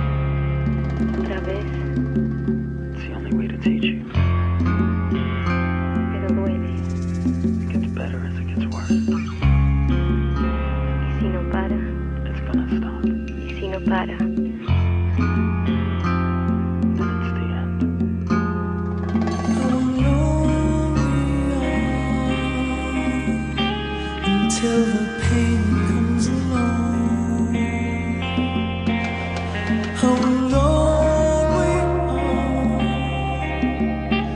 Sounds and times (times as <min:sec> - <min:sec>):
Music: 0:00.0 - 0:34.3
Speech: 0:01.2 - 0:01.8, 0:03.0 - 0:04.1, 0:06.1 - 0:06.8, 0:07.7 - 0:09.3, 0:11.1 - 0:14.8, 0:17.2 - 0:17.8.